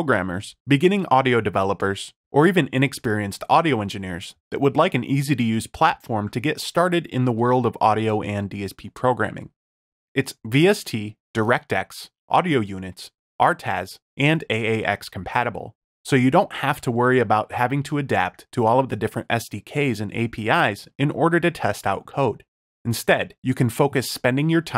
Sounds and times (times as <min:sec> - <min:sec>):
Speech: 0:00.0 - 0:09.6, 0:10.2 - 0:24.7.